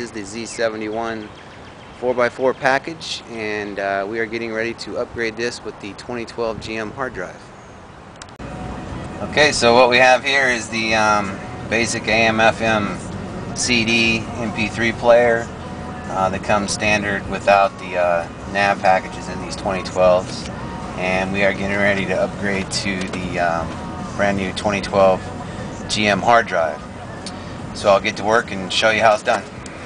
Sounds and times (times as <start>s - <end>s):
Speech: 0.0s - 1.3s, 2.0s - 7.5s, 9.2s - 13.0s, 13.6s - 15.5s, 16.1s - 26.8s, 27.8s - 29.5s
Music: 8.4s - 29.8s.